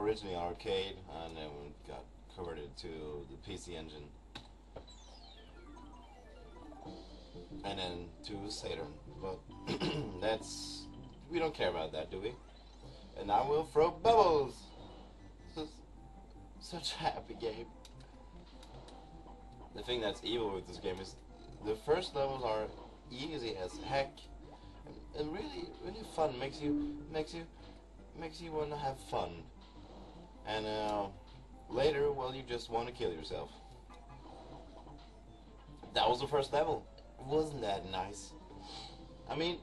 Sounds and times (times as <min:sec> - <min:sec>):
Speech: 0:00.0 - 0:04.2, 0:07.6 - 0:12.4, 0:13.2 - 0:14.7, 0:16.6 - 0:17.7, 0:19.8 - 0:24.2, 0:24.9 - 0:27.5, 0:28.2 - 0:29.5, 0:30.5 - 0:33.6, 0:35.9 - 0:38.4, 0:39.3 - 0:39.6.